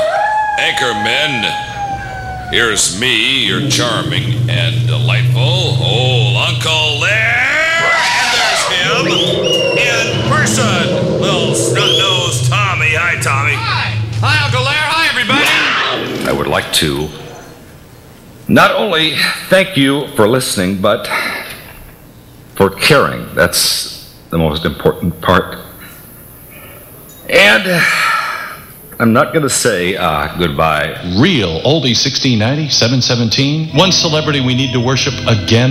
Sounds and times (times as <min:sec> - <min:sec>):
Speech: 0:00.6 - 0:01.6, 0:02.6 - 0:17.3, 0:18.5 - 0:21.5, 0:22.6 - 0:25.7, 0:29.0 - 0:35.7
Radio: 0:08.3 - 0:17.3.